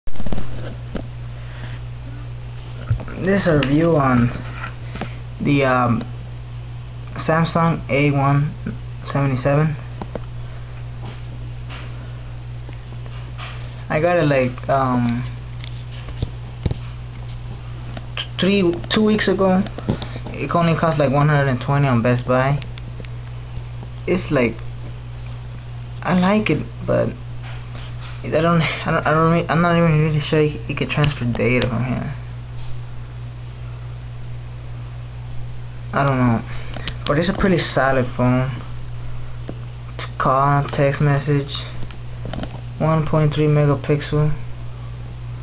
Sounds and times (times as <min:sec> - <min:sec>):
Speech: 0:03.0 - 0:04.4, 0:05.4 - 0:06.1, 0:07.1 - 0:09.9, 0:13.9 - 0:15.4, 0:18.2 - 0:22.7, 0:24.0 - 0:24.6, 0:26.0 - 0:27.2, 0:28.2 - 0:32.3, 0:35.9 - 0:38.7, 0:40.0 - 0:41.8, 0:42.8 - 0:44.4.